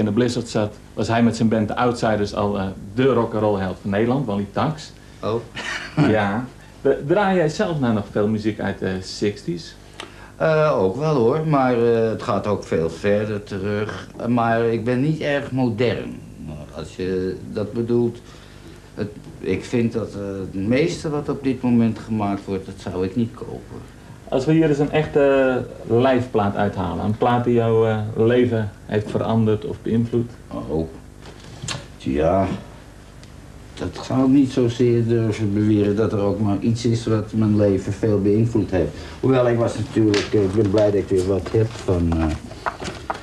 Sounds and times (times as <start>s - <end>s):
Speech: 0.0s - 9.8s, 10.4s - 18.2s, 19.0s - 31.0s, 32.0s - 32.7s, 33.8s - 42.5s.